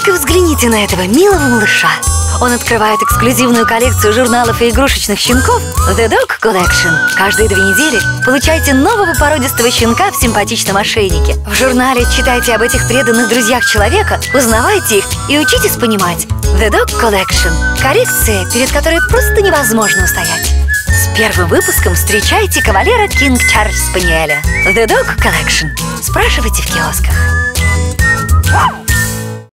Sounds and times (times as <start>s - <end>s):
Speech: 0.0s - 27.2s
Music: 0.0s - 29.5s.